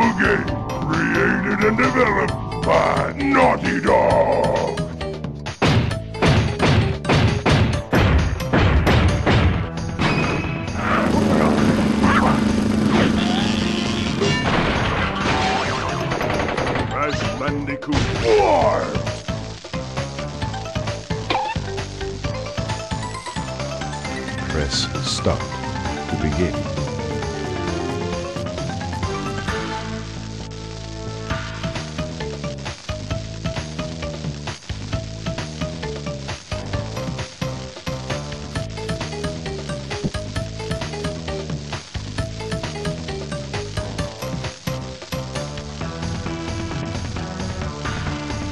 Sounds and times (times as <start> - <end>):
Speech: 0.0 - 4.8, 24.5 - 25.4
Music: 0.0 - 48.5.